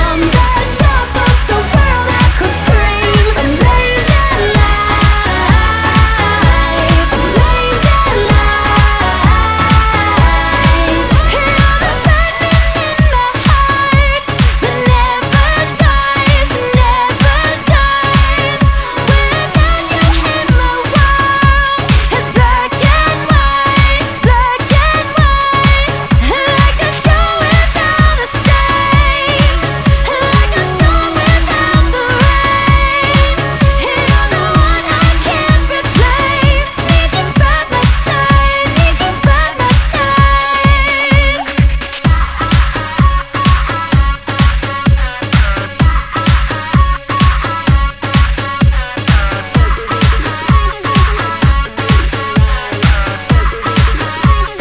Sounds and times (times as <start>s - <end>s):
Dance music: 0.0s - 54.6s.